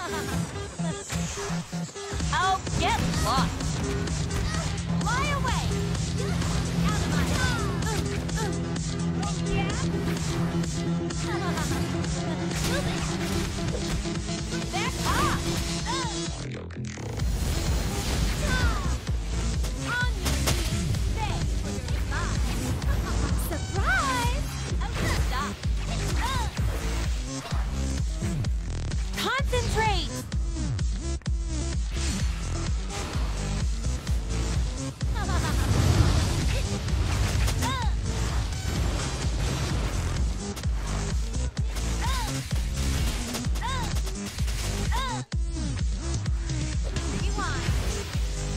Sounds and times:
Music: 0.0 - 48.5
Speech: 4.5 - 7.9, 9.2 - 9.9, 14.7 - 16.7, 23.4 - 26.6, 29.2 - 30.2, 47.1 - 47.7.

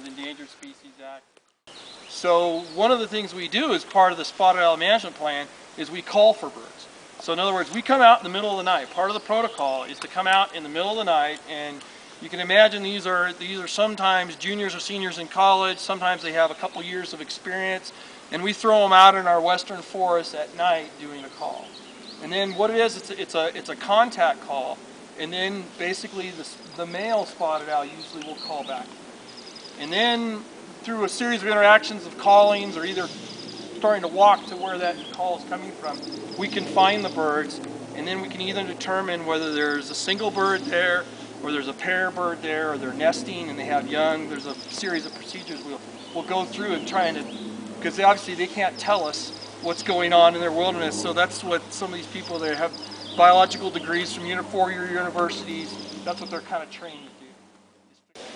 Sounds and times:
Speech: 0.0 - 1.2, 2.1 - 28.9, 29.8 - 33.1, 33.8 - 57.4
Bird: 25.4 - 30.3, 31.0 - 57.3.

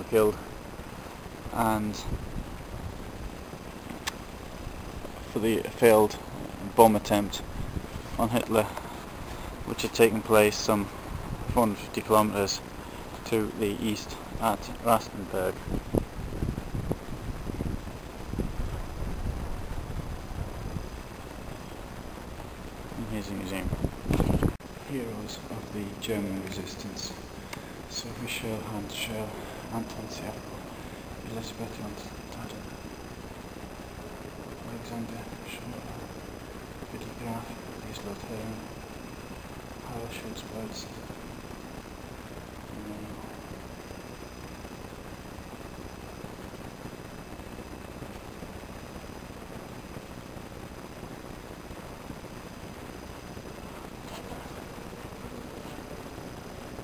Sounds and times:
Speech: 0.0 - 0.4, 1.5 - 2.2, 5.3 - 7.5, 8.2 - 8.8, 9.6 - 10.9, 11.5 - 12.6, 13.2 - 15.6, 23.0 - 23.8, 24.8 - 27.3, 27.9 - 32.8, 34.6 - 36.1, 36.9 - 38.7, 39.8 - 41.0, 42.7 - 43.5.

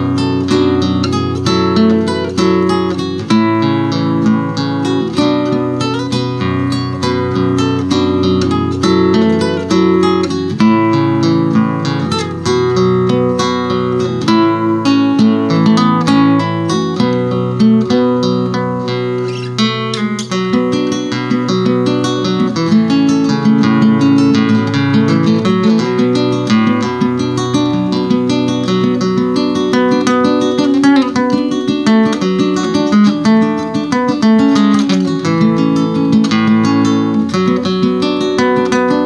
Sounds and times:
Acoustic guitar: 0.0 - 39.0
Strum: 0.0 - 39.0.

